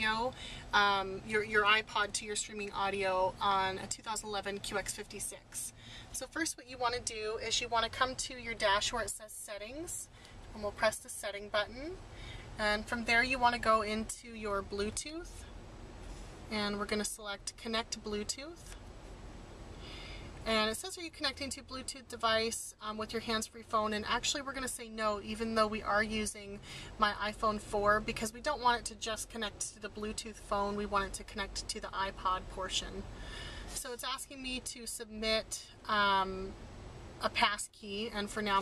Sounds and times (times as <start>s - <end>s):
Speech: 0.0s - 12.0s, 12.6s - 15.5s, 16.5s - 18.8s, 20.4s - 33.1s, 33.8s - 36.6s, 37.2s - 38.6s.